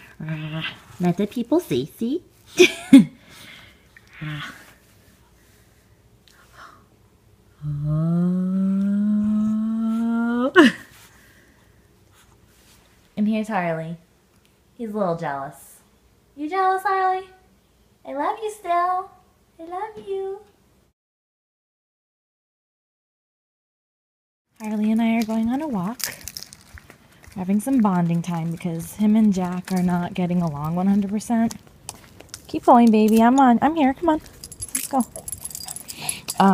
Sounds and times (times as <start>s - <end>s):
Speech: 0.2s - 2.3s, 13.2s - 14.0s, 14.8s - 15.8s, 18.1s - 20.5s, 24.6s - 26.0s, 27.4s - 31.6s, 32.5s - 34.2s.